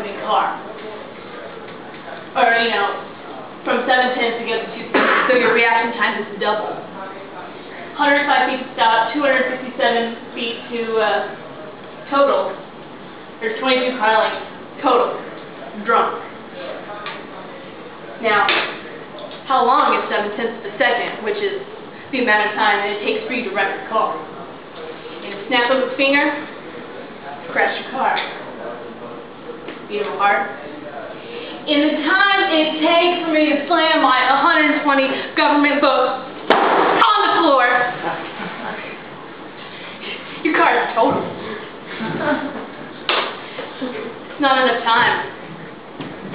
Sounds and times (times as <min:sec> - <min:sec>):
Speech: 0:00.0 - 0:12.7, 0:13.4 - 0:36.4, 0:40.0 - 0:41.6, 0:43.8 - 0:45.4
Inside, large room or hall: 0:00.0 - 0:46.3.